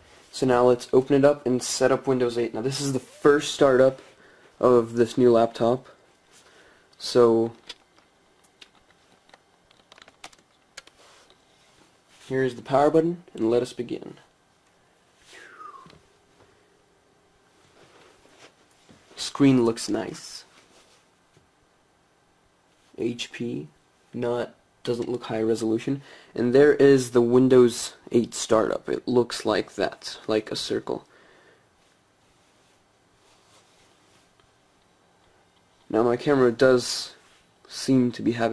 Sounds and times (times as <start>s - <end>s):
Computer keyboard: 8.6s - 11.0s.